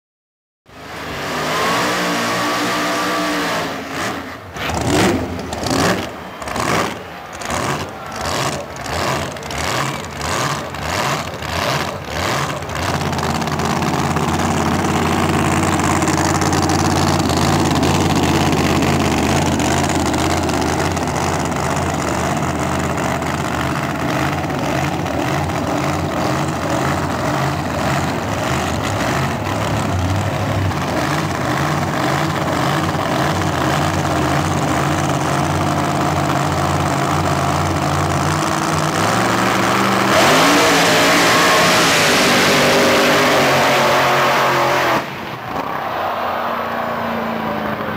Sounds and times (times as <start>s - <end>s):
Car: 0.6s - 47.9s
Accelerating, revving, vroom: 0.8s - 13.0s, 38.4s - 45.2s.